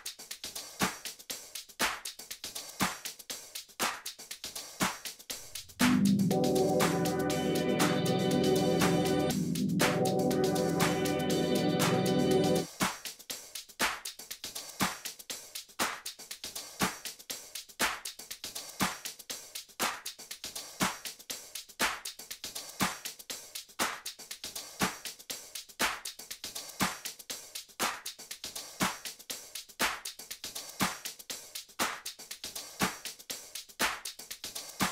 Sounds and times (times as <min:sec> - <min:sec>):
Music: 0:00.0 - 0:34.9.